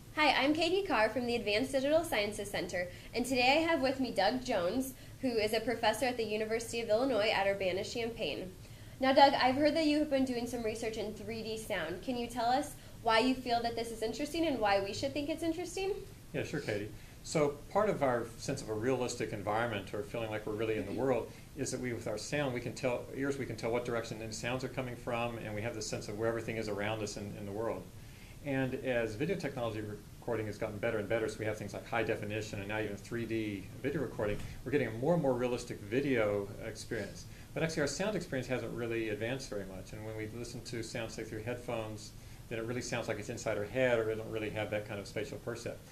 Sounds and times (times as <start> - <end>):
Speech: 0.2 - 45.8.